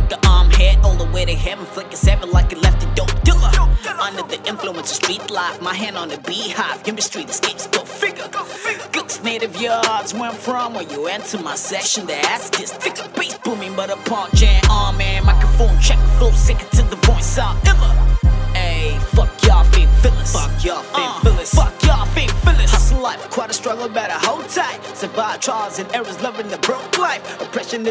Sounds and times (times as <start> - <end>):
Music: 0.0 - 27.9.